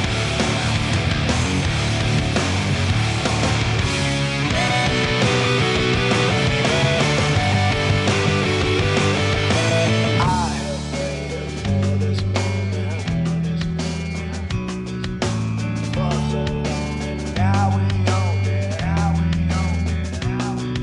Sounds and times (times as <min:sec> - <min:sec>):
Rock music: 0:00.0 - 0:20.8.